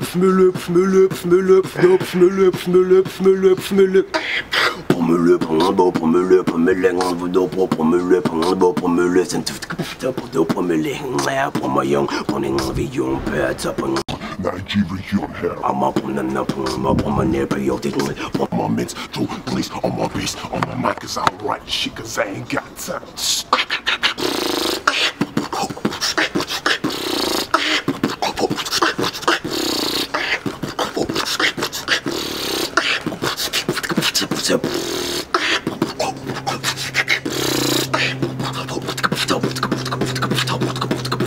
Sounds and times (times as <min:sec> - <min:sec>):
Beatboxing: 0:00.0 - 0:21.7, 0:22.4 - 0:41.2.